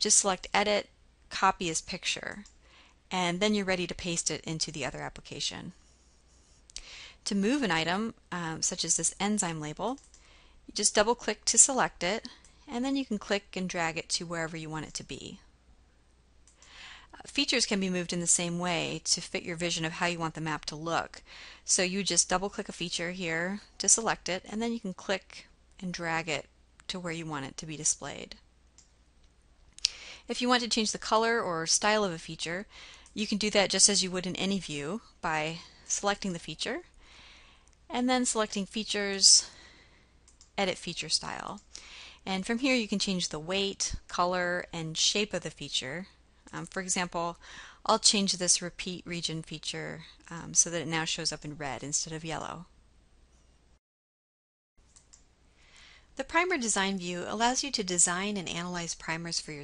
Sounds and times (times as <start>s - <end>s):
Speech: 0.0s - 2.5s, 3.1s - 5.8s, 7.3s - 10.1s, 10.7s - 15.5s, 17.2s - 28.4s, 30.3s - 36.9s, 37.9s - 39.6s, 40.6s - 41.6s, 42.2s - 52.7s, 56.2s - 59.6s.